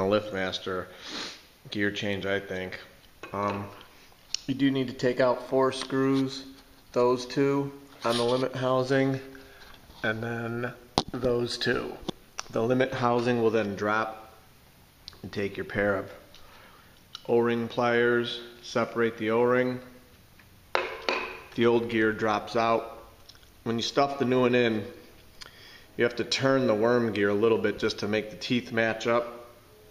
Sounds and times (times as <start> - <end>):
Speech: 0.0 - 0.9, 1.7 - 3.8, 4.4 - 9.3, 10.0 - 14.4, 15.1 - 16.2, 17.2 - 19.9, 21.6 - 25.0, 26.0 - 29.5.